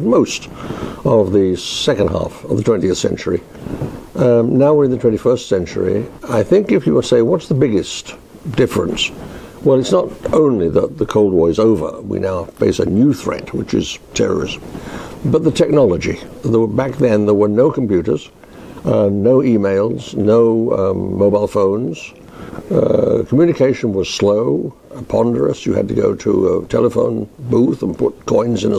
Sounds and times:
Speech: 0.0s - 3.5s, 4.2s - 14.6s, 15.2s - 28.7s.

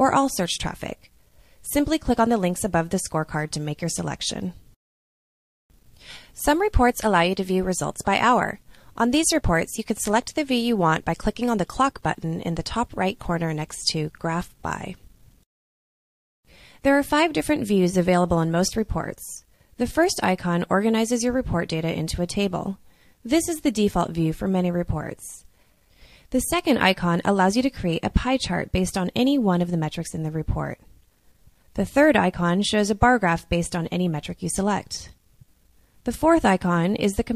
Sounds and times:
Speech: 0.0s - 4.6s, 6.4s - 15.1s, 16.8s - 25.5s, 26.3s - 30.9s, 31.8s - 35.2s, 36.1s - 37.3s.

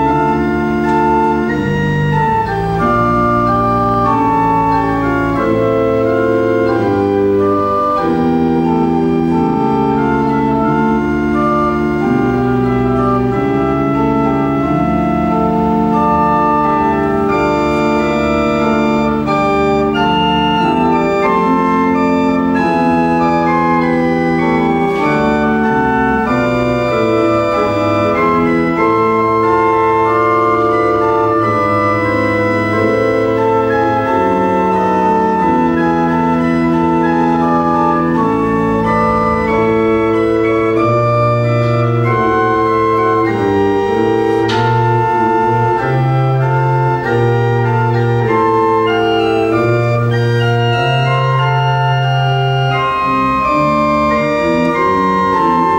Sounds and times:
Organ: 0.0s - 55.7s
Piano: 0.0s - 55.7s.

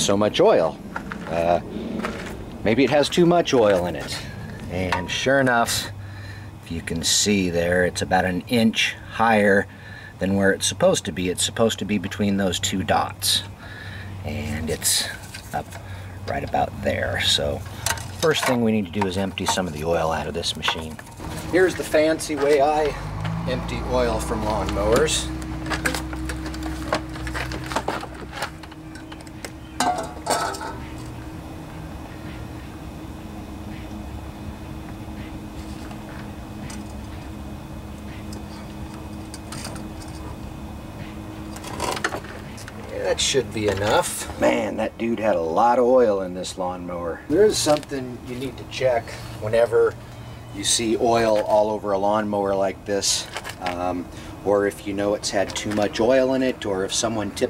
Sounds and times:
Speech: 0.0s - 1.6s, 2.7s - 6.0s, 6.7s - 13.5s, 14.2s - 15.7s, 16.3s - 25.3s, 42.9s - 50.0s, 50.6s - 57.5s.

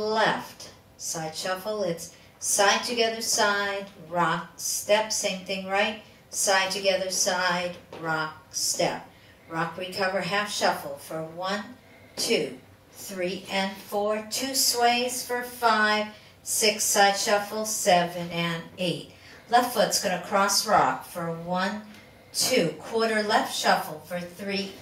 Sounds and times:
Speech: 0.0s - 24.8s.

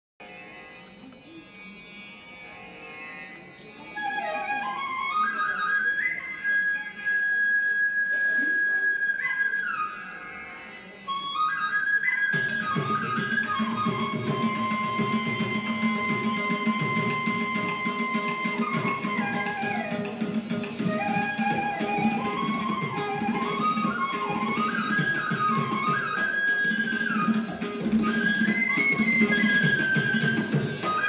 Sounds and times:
Inside, large room or hall: 0.2s - 31.0s
Music: 0.2s - 31.0s.

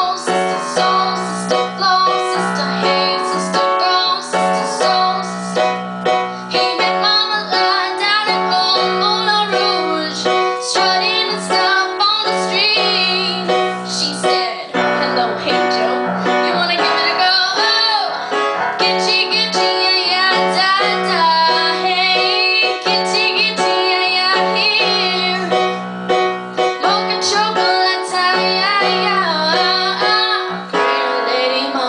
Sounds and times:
Female singing: 0.0s - 5.6s, 6.6s - 18.2s, 18.8s - 25.6s, 26.8s - 31.8s
Music: 0.0s - 31.8s.

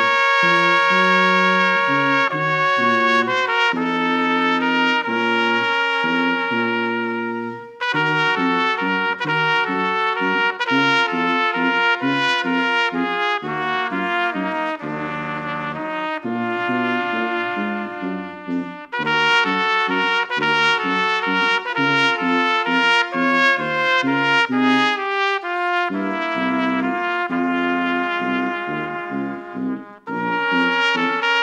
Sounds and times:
Trombone: 0.0s - 31.4s
Trumpet: 0.0s - 31.4s.

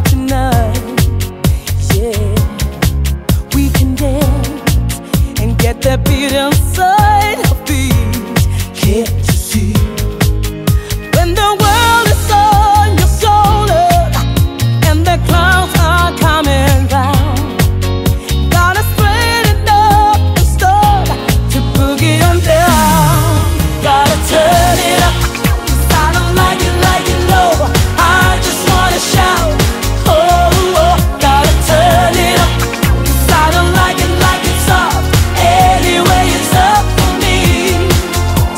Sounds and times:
Music: 0.0s - 38.5s.

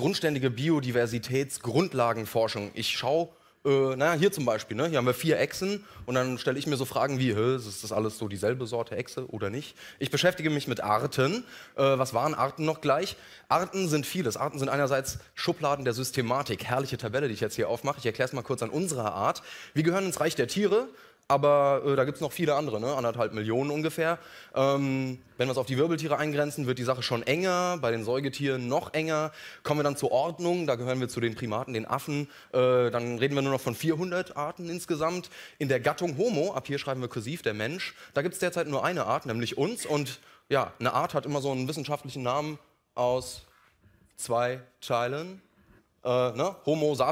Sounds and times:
Speech: 0.0s - 43.5s, 44.2s - 45.4s, 46.0s - 47.1s.

